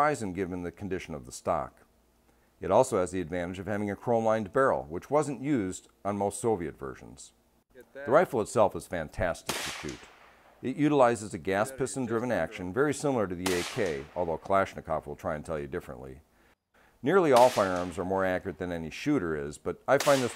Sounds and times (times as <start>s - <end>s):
Speech: 0.0s - 1.9s, 2.6s - 10.0s, 10.6s - 16.2s, 17.0s - 20.3s
Outside, rural or natural: 7.4s - 20.3s.